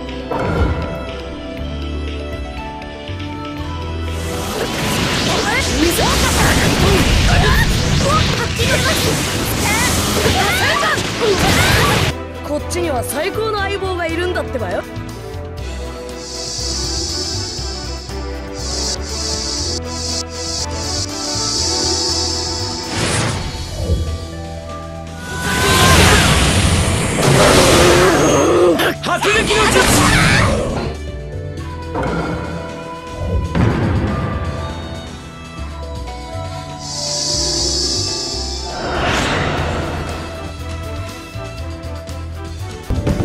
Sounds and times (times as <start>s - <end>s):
Music: 0.0s - 43.2s
Speech: 5.3s - 14.9s, 28.8s - 30.5s.